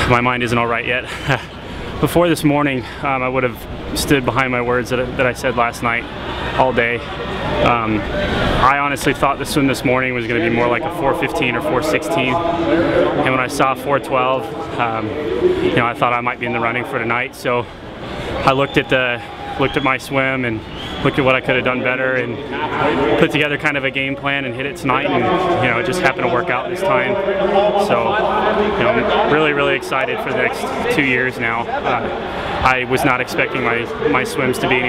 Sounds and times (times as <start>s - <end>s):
Speech: 0.0s - 1.4s, 2.0s - 6.0s, 6.6s - 17.7s, 18.4s - 34.8s.